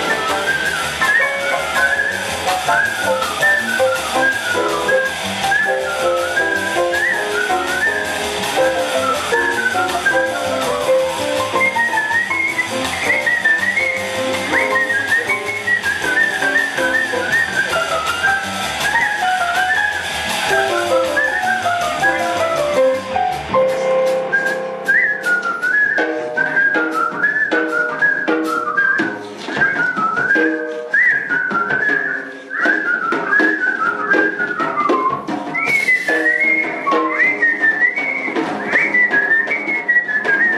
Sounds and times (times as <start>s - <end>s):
Whistling: 0.0s - 23.0s, 23.7s - 40.5s.